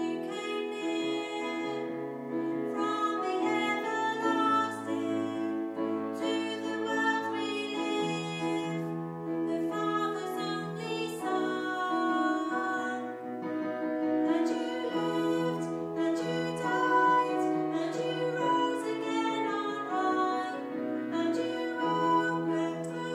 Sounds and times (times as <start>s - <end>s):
Gospel music: 0.0s - 23.1s
Tender music: 0.0s - 23.1s.